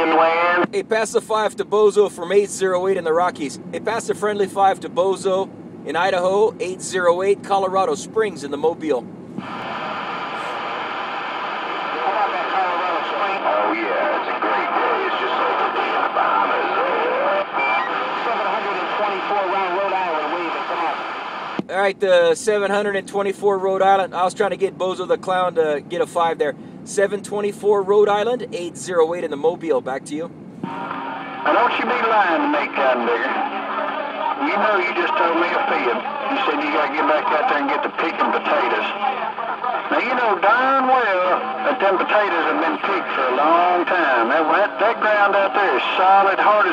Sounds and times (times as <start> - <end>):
Speech: 0.0 - 9.0, 12.0 - 17.4, 18.2 - 21.0, 21.6 - 30.3, 31.5 - 33.4, 34.3 - 46.7
Radio: 0.0 - 22.6, 30.6 - 46.7.